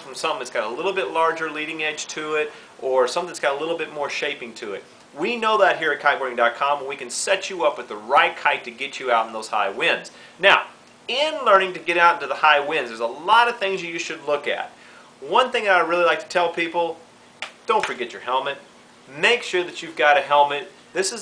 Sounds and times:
Speech: 0:00.0 - 0:17.0, 0:17.7 - 0:21.2.

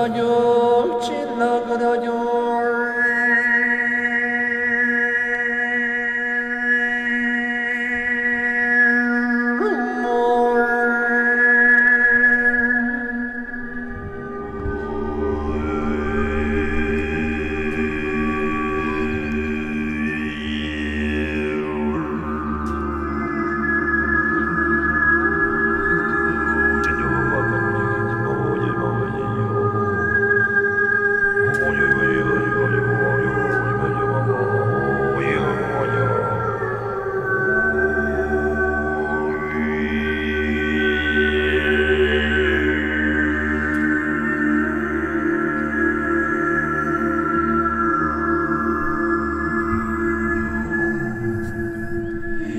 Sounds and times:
Mantra: 0:00.0 - 0:13.2, 0:14.3 - 0:52.5.

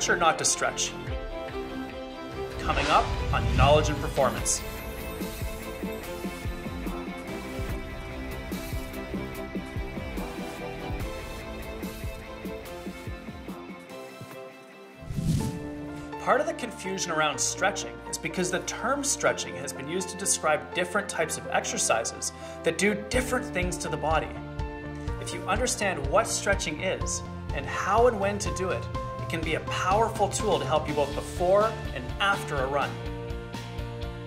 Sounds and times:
Speech: 0:00.0 - 0:01.1, 0:02.6 - 0:04.6, 0:16.2 - 0:24.4, 0:25.2 - 0:33.0
Music: 0:00.0 - 0:34.2.

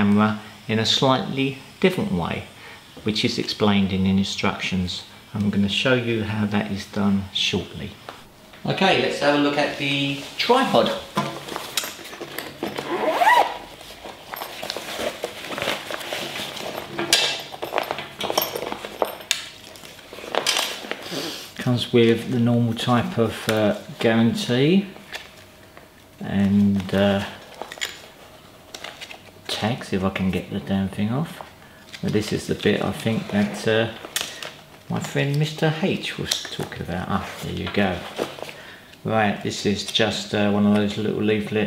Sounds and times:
Speech: 0:00.0 - 0:08.0, 0:08.6 - 0:11.1, 0:21.6 - 0:25.0, 0:26.2 - 0:27.4, 0:29.5 - 0:34.0, 0:34.9 - 0:38.2, 0:39.0 - 0:41.6
Inside, small room: 0:00.0 - 0:41.6.

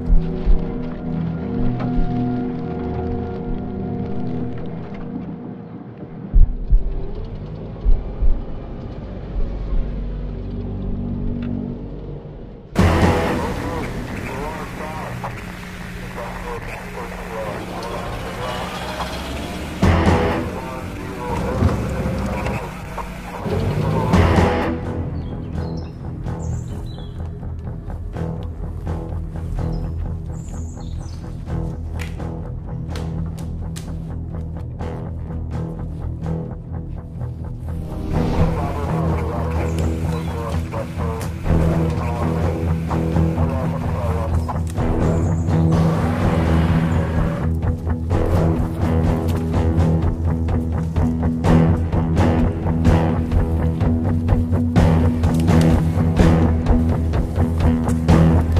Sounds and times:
Music: 0:00.0 - 0:58.5
Speech: 0:13.0 - 0:19.2, 0:20.3 - 0:24.3, 0:38.3 - 0:42.7, 0:43.3 - 0:44.5.

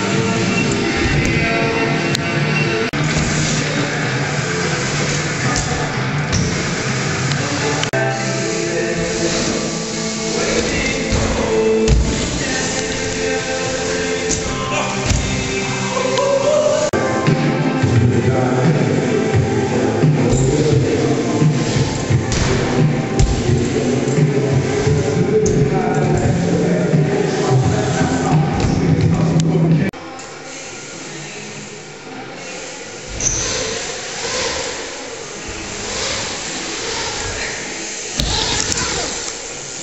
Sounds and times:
Music: 0:00.0 - 0:39.8
Speech: 0:25.2 - 0:29.9.

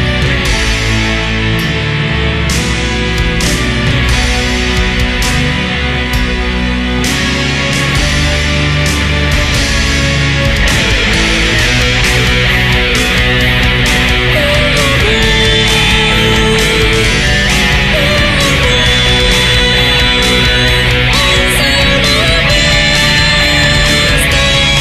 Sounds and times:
Music: 0:00.0 - 0:24.8.

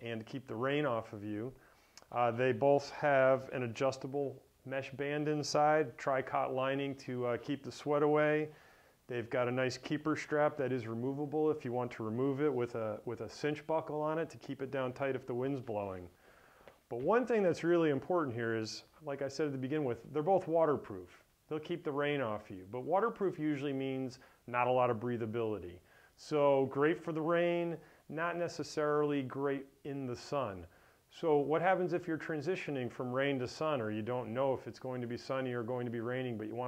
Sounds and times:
Speech: 0:00.0 - 0:16.1, 0:16.9 - 0:36.6.

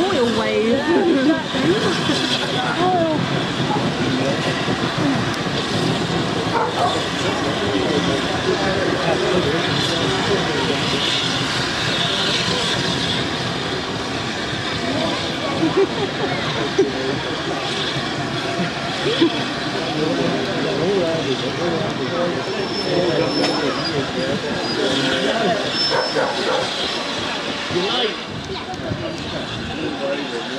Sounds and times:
Hubbub, speech noise, speech babble: 0:00.0 - 0:30.5
Railroad car, train wagon: 0:00.0 - 0:30.5
Train: 0:00.0 - 0:30.5.

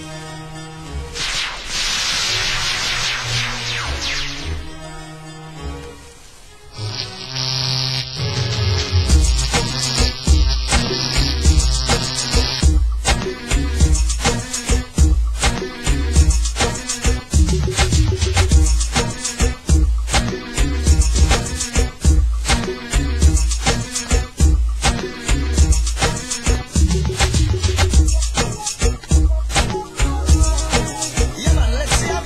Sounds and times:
Music: 0:00.0 - 0:32.2.

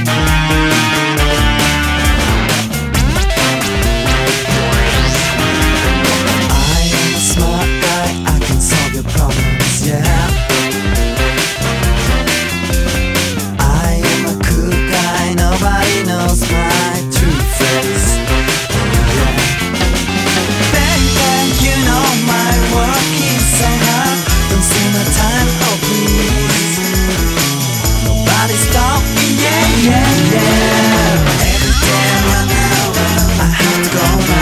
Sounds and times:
Music: 0:00.0 - 0:34.4.

